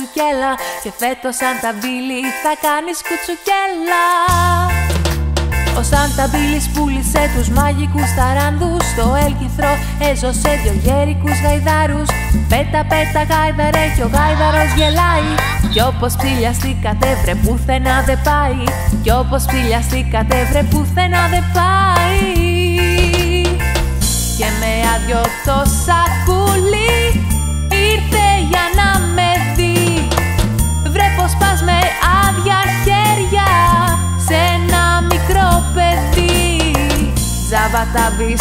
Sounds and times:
Christian music: 0:00.0 - 0:07.5, 0:11.2 - 0:20.6, 0:22.1 - 0:38.4.

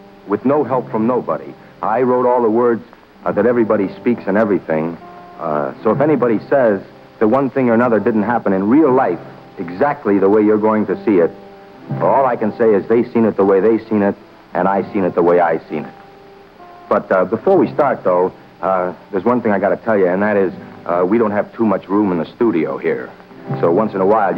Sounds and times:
Music: 0:00.0 - 0:24.3
Speech: 0:00.3 - 0:16.0, 0:16.9 - 0:24.3.

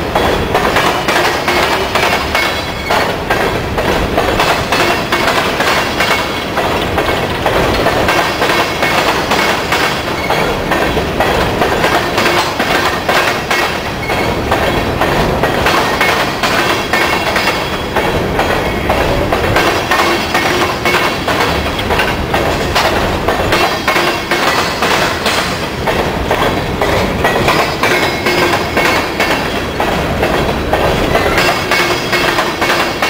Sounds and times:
Clickety-clack: 0:00.0 - 0:33.0
Railroad car, train wagon: 0:00.0 - 0:33.0
Train: 0:00.0 - 0:33.0.

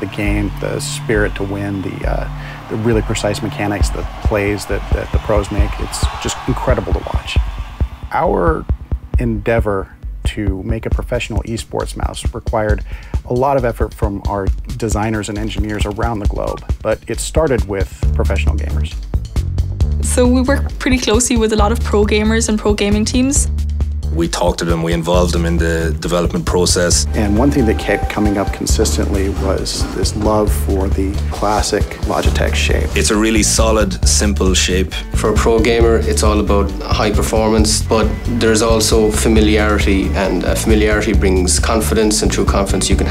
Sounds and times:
Speech: 0:00.0 - 0:07.4, 0:08.1 - 0:19.0, 0:20.1 - 0:23.5, 0:24.1 - 0:43.1
Music: 0:00.0 - 0:43.1.

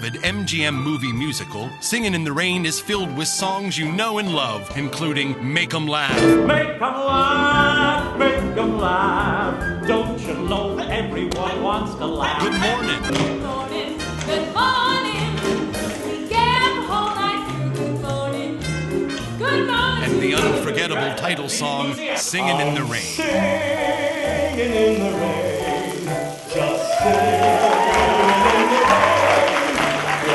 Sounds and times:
Speech: 0:00.0 - 0:06.2, 0:20.0 - 0:23.2
Music: 0:00.0 - 0:30.3
Rain on surface: 0:22.2 - 0:30.3.

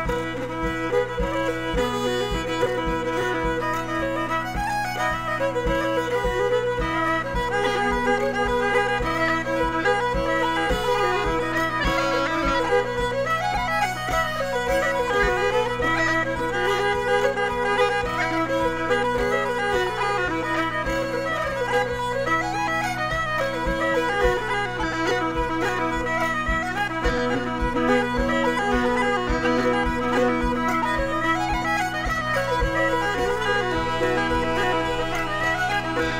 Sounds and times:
Music: 0:00.0 - 0:36.1.

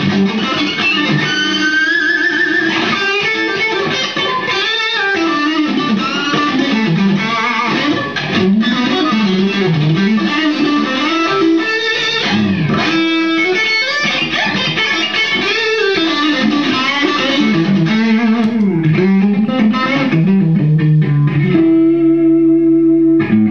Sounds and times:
Blues: 0:00.0 - 0:23.5.

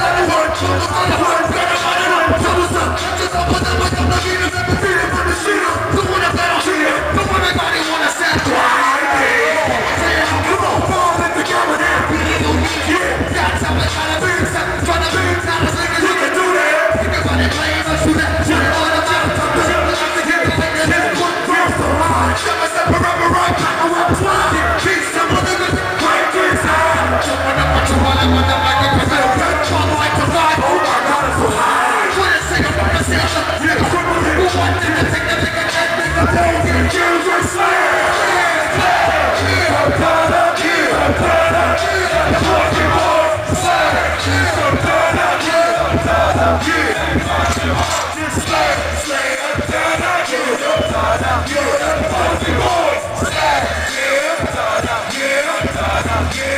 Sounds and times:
Music: 0:00.0 - 0:56.5.

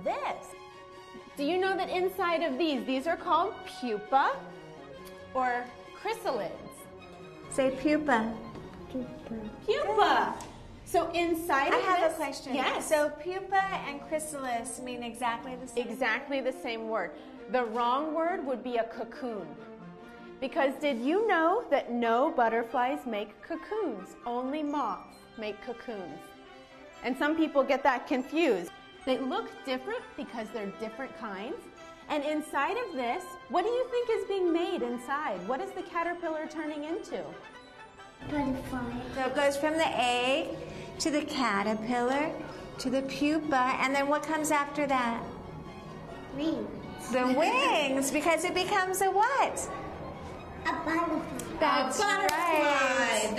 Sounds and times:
Female speech, woman speaking: 0:00.0 - 0:00.5, 0:05.4 - 0:06.8, 0:07.5 - 0:08.4, 0:09.0 - 0:19.6, 0:20.4 - 0:26.2, 0:27.0 - 0:37.4, 0:39.1 - 0:45.3, 0:47.0 - 0:49.7, 0:51.6 - 0:53.3
Music: 0:00.0 - 0:53.3
Child speech, kid speaking: 0:38.2 - 0:39.2, 0:46.3 - 0:46.8, 0:50.6 - 0:53.3.

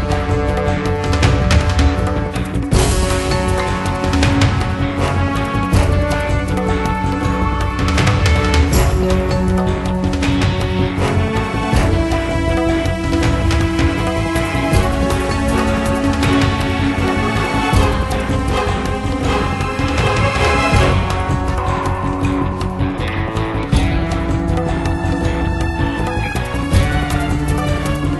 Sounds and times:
Music: 0:00.0 - 0:28.1.

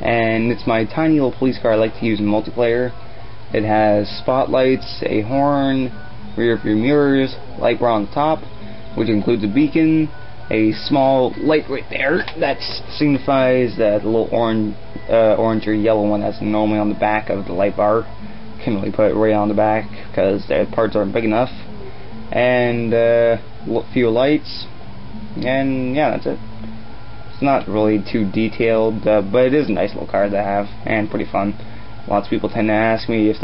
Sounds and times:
Speech: 0:00.0 - 0:08.4, 0:09.0 - 0:21.7, 0:22.3 - 0:24.7, 0:25.4 - 0:26.4, 0:27.4 - 0:33.4
Music: 0:00.0 - 0:33.4.

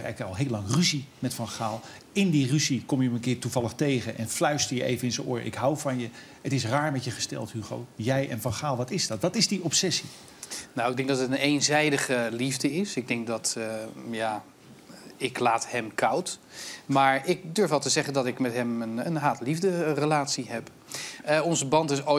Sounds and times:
Speech: 0:00.0 - 0:10.1, 0:10.8 - 0:20.7, 0:21.3 - 0:22.1.

